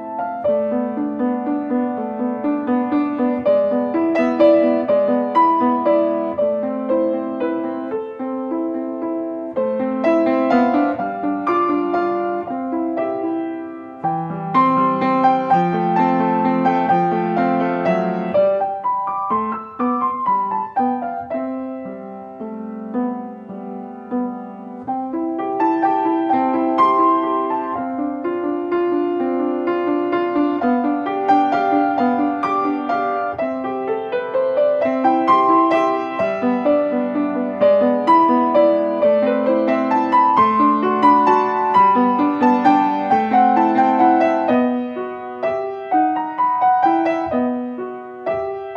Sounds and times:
Music: 0.0s - 48.7s.

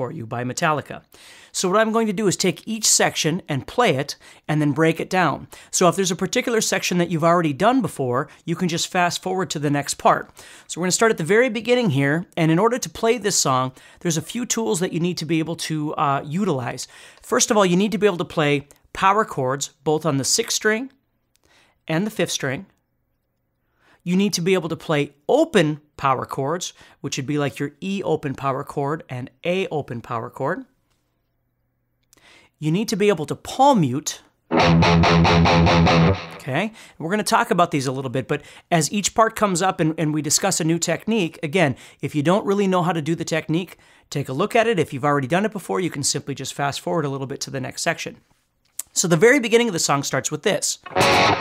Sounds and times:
Speech: 0.0s - 21.0s, 21.9s - 22.8s, 24.0s - 30.8s, 32.6s - 34.4s, 36.4s - 50.9s
Music: 34.5s - 36.5s, 50.8s - 51.4s.

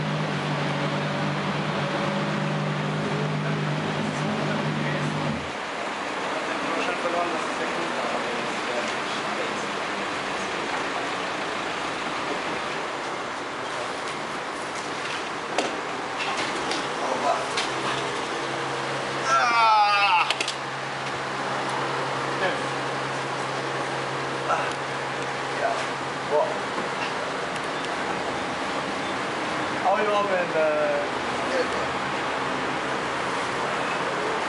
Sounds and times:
Car: 0.0s - 34.4s
Engine: 0.0s - 34.4s
Speech: 5.9s - 11.6s, 17.0s - 17.6s, 25.6s - 26.6s, 29.8s - 32.0s.

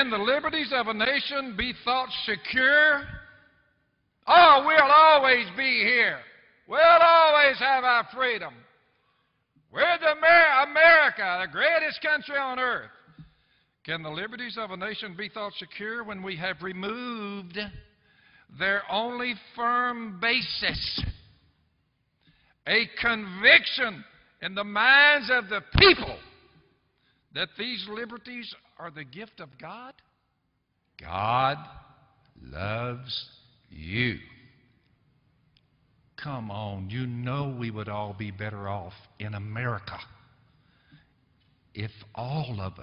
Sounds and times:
Speech: 0.0s - 3.3s, 4.2s - 8.7s, 9.7s - 13.0s, 13.8s - 17.9s, 18.5s - 21.2s, 22.7s - 26.3s, 27.3s - 30.1s, 31.0s - 34.5s, 36.2s - 40.3s, 41.7s - 42.8s.

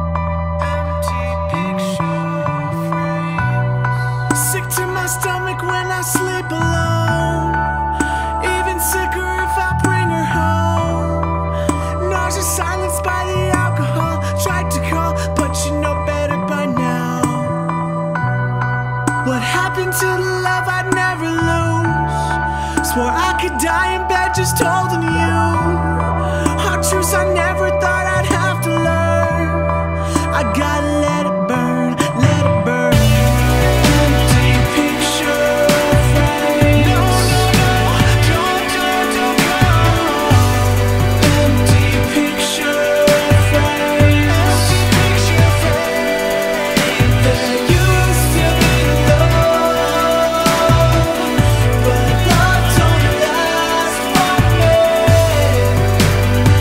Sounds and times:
Music: 0.0s - 56.6s.

